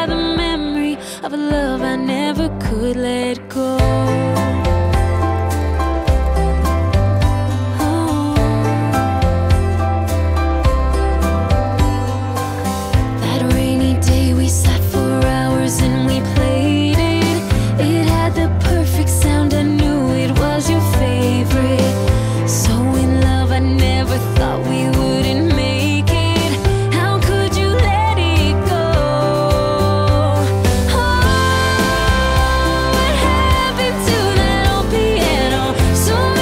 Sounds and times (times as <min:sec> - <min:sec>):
Music: 0:00.0 - 0:36.4.